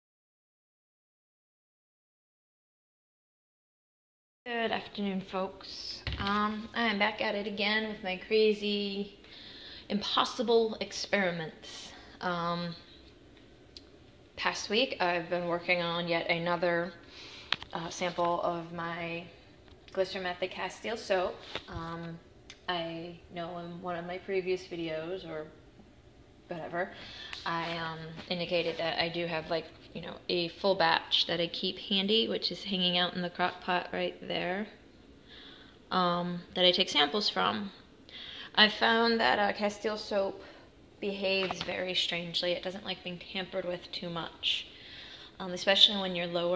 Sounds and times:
Speech: 0:04.5 - 0:09.2, 0:09.9 - 0:12.9, 0:14.4 - 0:17.0, 0:17.7 - 0:25.6, 0:26.5 - 0:34.8, 0:35.9 - 0:37.8, 0:38.5 - 0:44.7, 0:45.4 - 0:46.5.

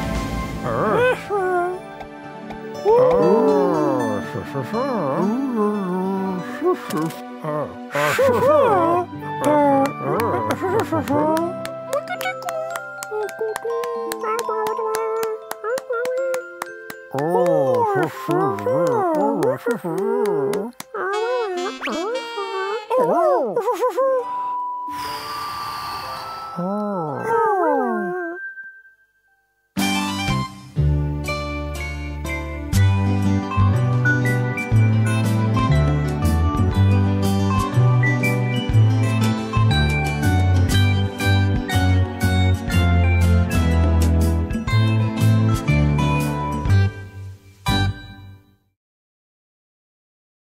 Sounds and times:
Music: 0:00.0 - 0:27.8, 0:28.4 - 0:48.8.

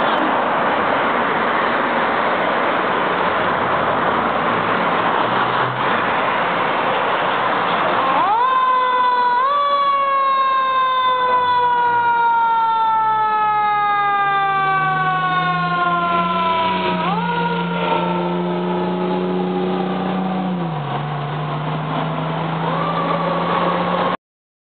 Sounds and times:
Vehicle: 0:00.0 - 0:24.2
Medium engine (mid frequency): 0:18.0 - 0:24.2.

